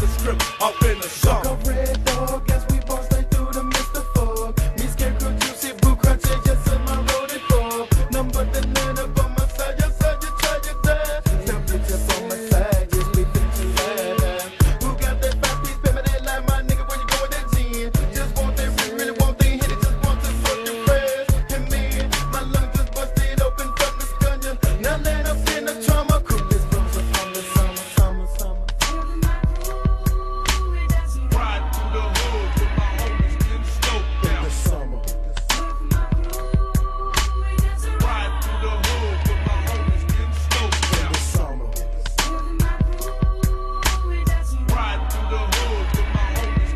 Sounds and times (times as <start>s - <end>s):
Hip hop music: 0.0s - 46.7s.